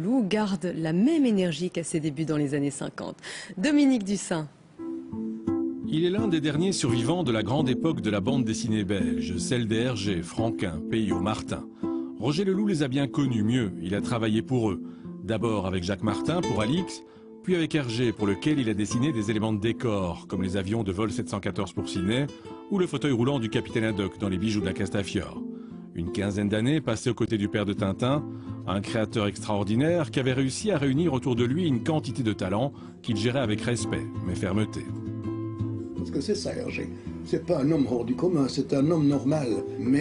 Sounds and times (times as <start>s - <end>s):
Music: 4.7s - 40.0s
Speech: 5.9s - 11.6s, 12.2s - 25.4s, 26.0s - 34.9s, 36.0s - 40.0s.